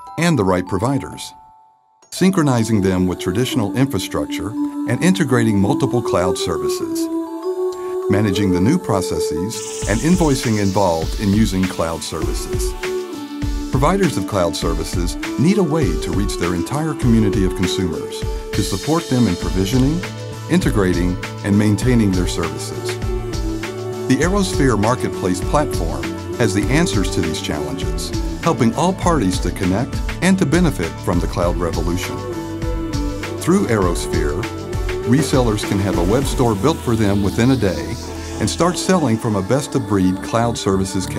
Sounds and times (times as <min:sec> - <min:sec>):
Music: 0:00.0 - 0:41.1
Speech: 0:00.2 - 0:01.4, 0:02.2 - 0:07.1, 0:08.1 - 0:12.8, 0:13.8 - 0:23.0, 0:24.1 - 0:32.3, 0:33.4 - 0:34.5, 0:35.1 - 0:41.1.